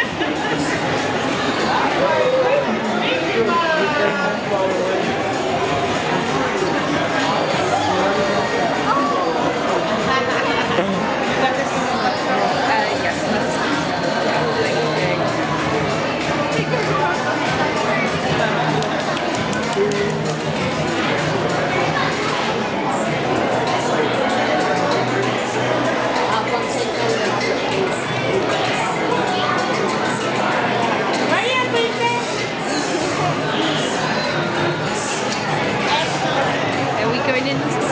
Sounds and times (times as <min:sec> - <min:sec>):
Music: 0:00.0 - 0:37.9
Speech: 0:00.0 - 0:37.9.